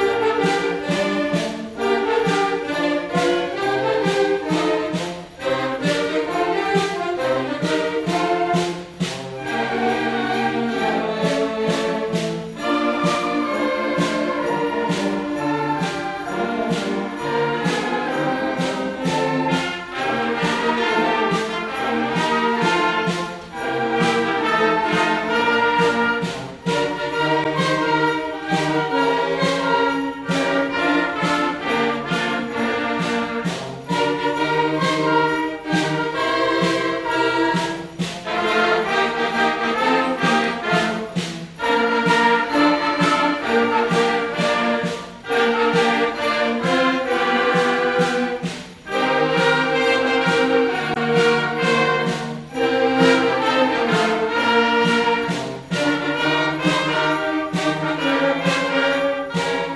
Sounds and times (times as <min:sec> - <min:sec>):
Jingle bell: 0:00.0 - 0:59.7.